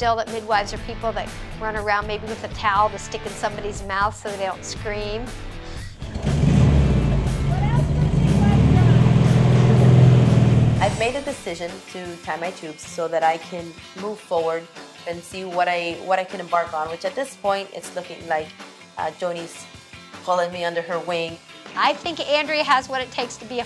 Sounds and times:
Speech: 0.0s - 5.3s, 7.7s - 9.0s, 10.8s - 19.6s, 20.3s - 23.6s
Music: 0.0s - 23.6s
Accelerating, revving, vroom: 6.0s - 11.1s.

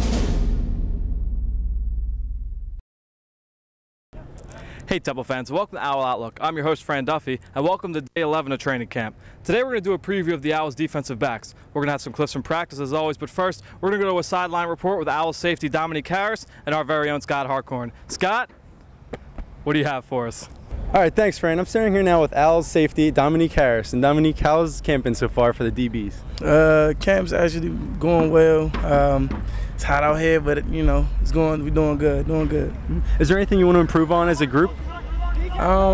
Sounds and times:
Speech: 4.2s - 18.5s, 19.7s - 35.9s.

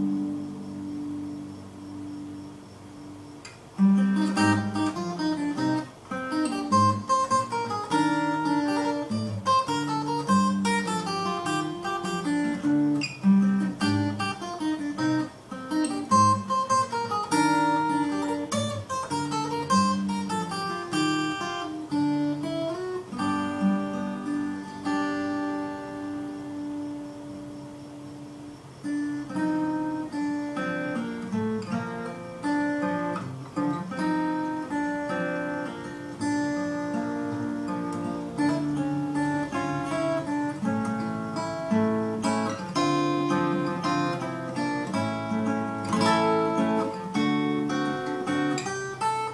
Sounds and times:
Acoustic guitar: 0.0s - 49.3s.

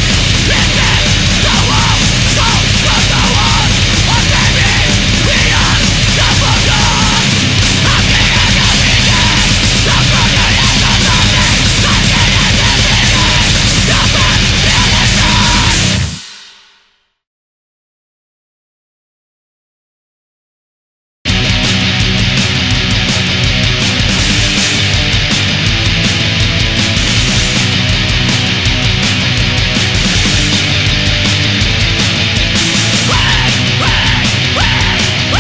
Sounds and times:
Heavy metal: 0.0s - 17.1s, 21.3s - 35.4s.

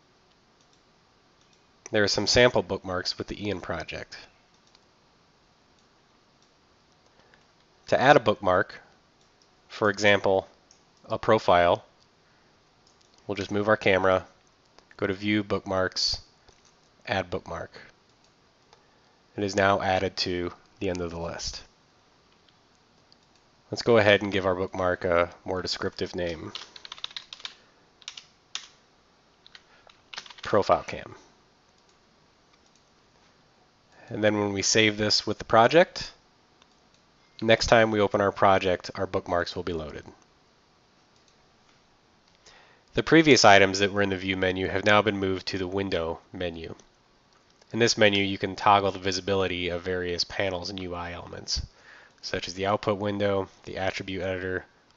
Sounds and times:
Speech: 1.9s - 4.3s, 7.9s - 8.9s, 9.7s - 10.5s, 11.1s - 11.9s, 13.3s - 14.4s, 15.0s - 16.2s, 17.1s - 17.9s, 19.4s - 21.7s, 23.7s - 26.6s, 30.4s - 31.2s, 34.0s - 36.2s, 37.4s - 40.2s, 43.0s - 46.8s, 47.7s - 54.7s.

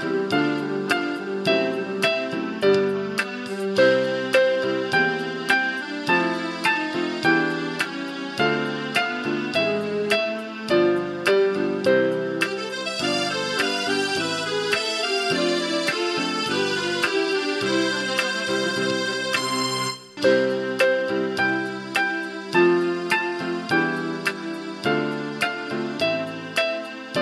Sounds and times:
Happy music: 0.0s - 27.2s.

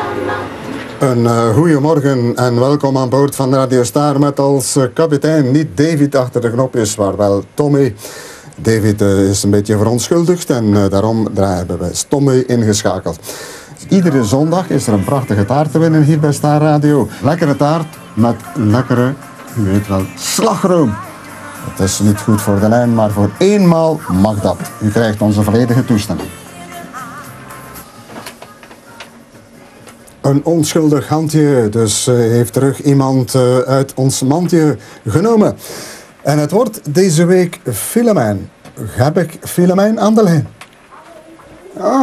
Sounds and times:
Speech: 1.0s - 8.0s, 8.6s - 13.2s, 13.8s - 21.0s, 21.7s - 26.3s, 30.2s - 35.6s, 36.2s - 42.0s
Music: 13.9s - 29.8s.

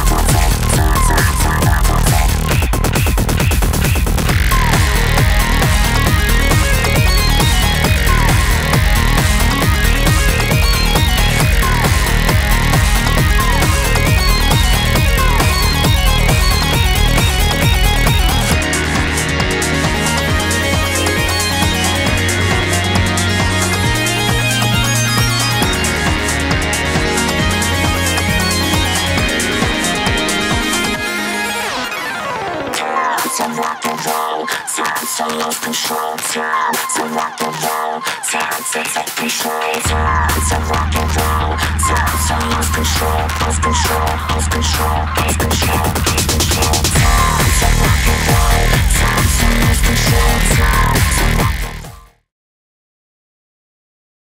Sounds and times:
Music: 0.0s - 52.3s.

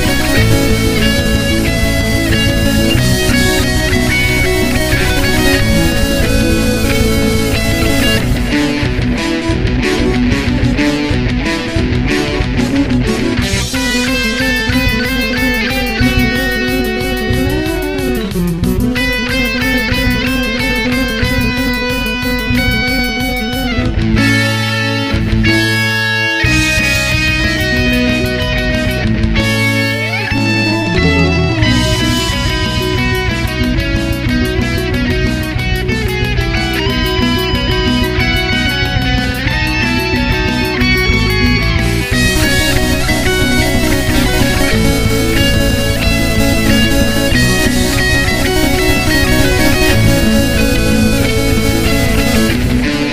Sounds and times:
Theme music: 0.0s - 24.0s, 29.6s - 34.3s, 40.6s - 53.1s.

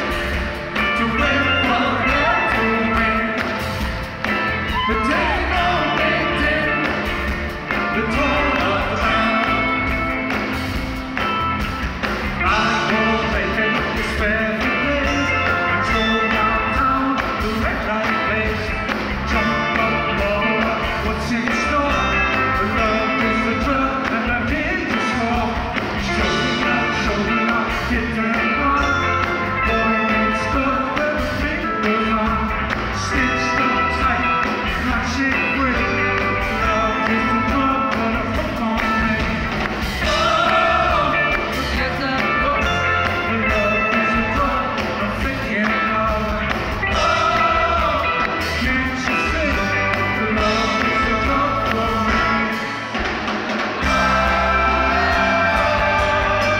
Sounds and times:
Blues: 0.0s - 56.5s
Rhythm and blues: 0.0s - 56.5s.

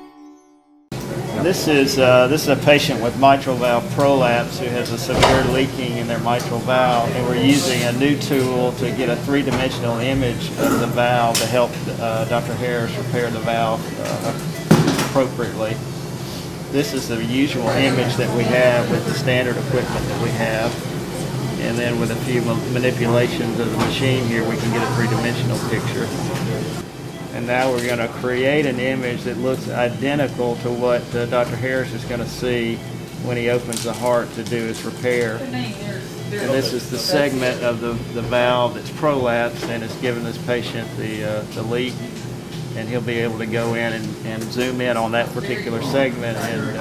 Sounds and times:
Speech: 1.3s - 14.4s, 15.0s - 15.8s, 16.7s - 20.8s, 21.5s - 42.1s, 42.8s - 46.8s.

